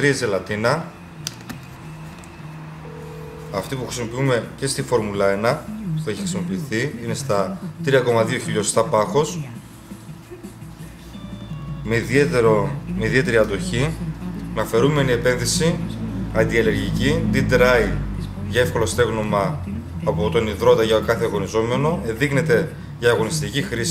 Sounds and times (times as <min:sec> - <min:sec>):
Music: 0:00.9 - 0:04.2, 0:05.7 - 0:19.0
Speech: 0:03.6 - 0:09.6, 0:11.9 - 0:23.9.